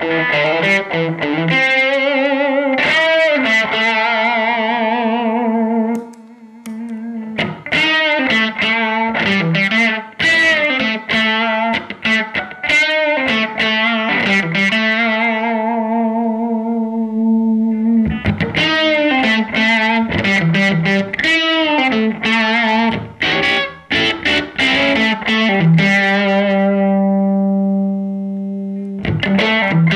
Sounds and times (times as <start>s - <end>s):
Distortion: 0.0s - 29.9s
Effects unit: 0.0s - 29.9s
Guitar: 0.0s - 29.9s.